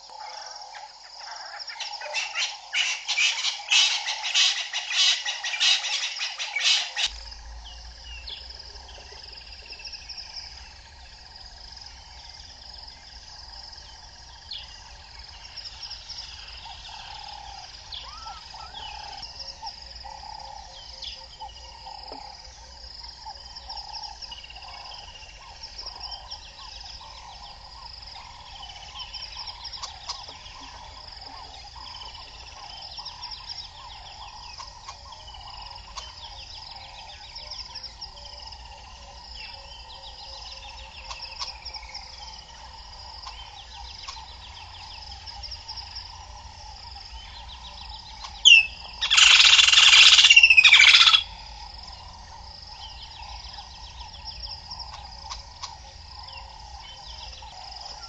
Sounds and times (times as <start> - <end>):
Animal: 0.0 - 7.3, 13.9 - 58.0.